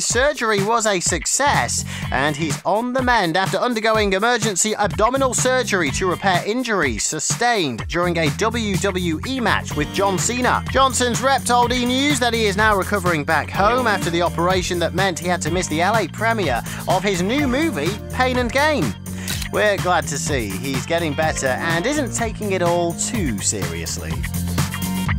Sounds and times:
Speech: 0.0s - 24.2s
Music: 0.0s - 25.1s.

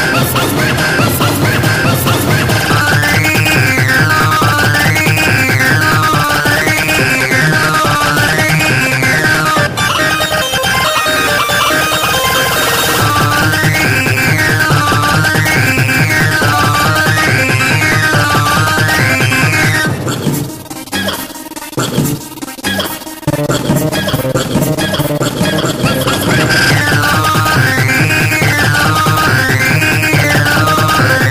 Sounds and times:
Techno: 0.0s - 31.3s.

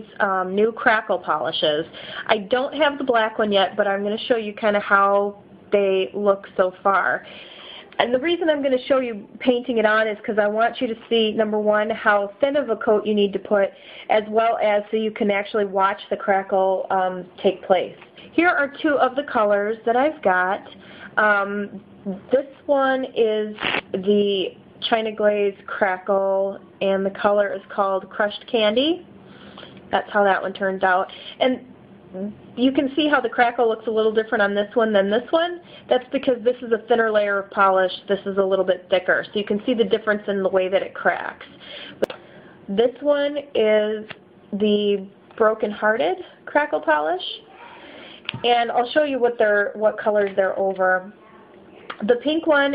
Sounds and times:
Speech: 0.0s - 29.0s, 29.9s - 31.6s, 32.2s - 41.6s, 42.7s - 52.7s.

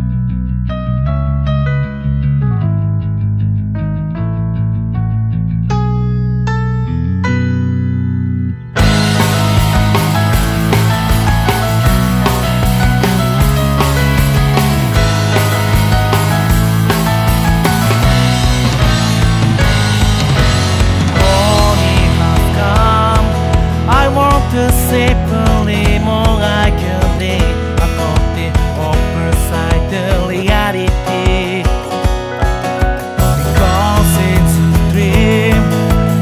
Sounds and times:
Music: 0.0s - 36.2s.

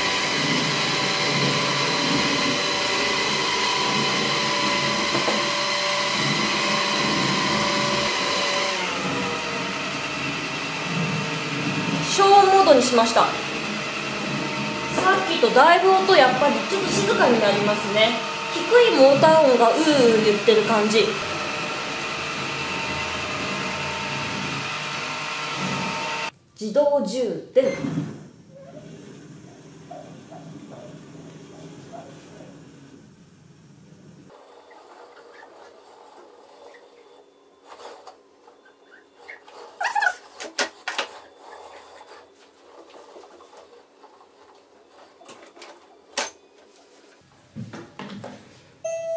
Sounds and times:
Vacuum cleaner: 0.0s - 26.4s, 27.9s - 33.2s.

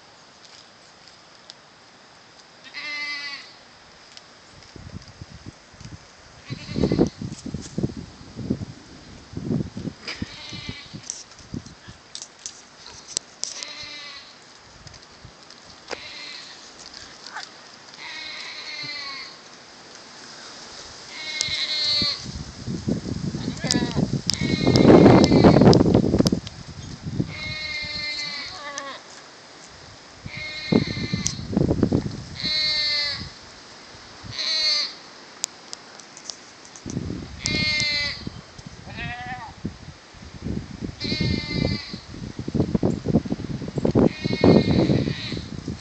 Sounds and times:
Livestock, farm animals, working animals: 2.6s - 3.6s, 6.4s - 7.2s, 10.0s - 11.1s, 12.8s - 19.6s, 21.1s - 22.2s, 23.4s - 25.6s, 27.3s - 29.2s, 30.3s - 31.4s, 32.4s - 33.3s, 34.3s - 35.0s, 37.4s - 39.6s, 41.0s - 42.1s, 44.1s - 45.5s.

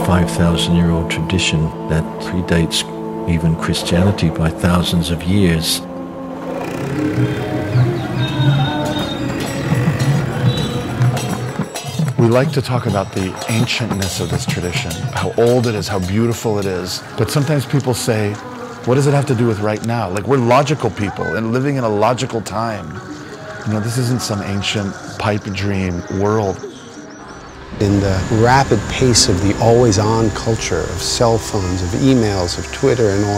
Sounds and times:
Speech: 0.0s - 5.8s, 12.2s - 23.0s, 23.6s - 26.6s, 27.8s - 33.3s
Music: 0.0s - 33.3s.

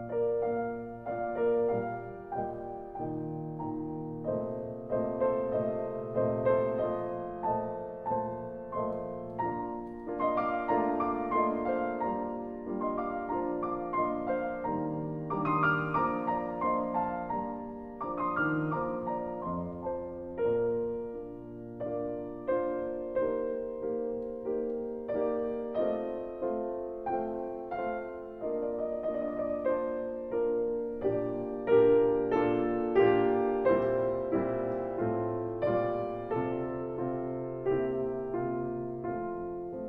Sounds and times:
Music: 0.0s - 39.8s.

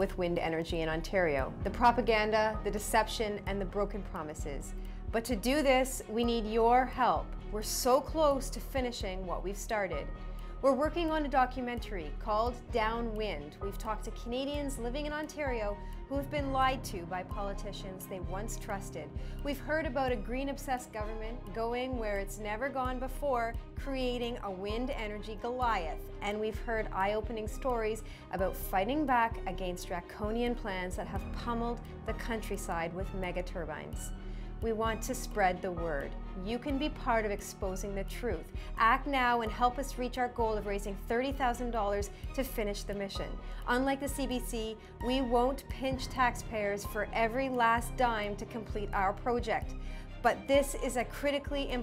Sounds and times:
Music: 0.0s - 51.8s
Speech: 0.0s - 51.8s.

